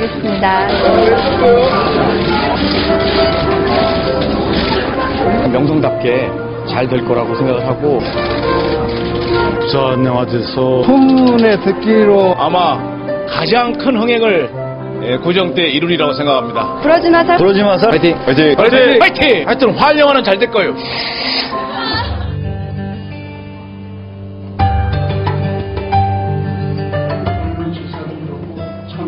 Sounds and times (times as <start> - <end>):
Music: 0.0 - 29.0.